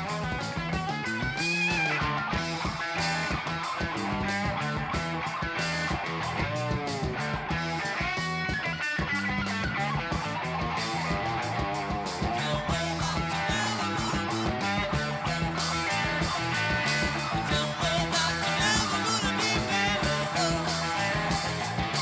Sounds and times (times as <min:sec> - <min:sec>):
Music: 0:00.0 - 0:22.0.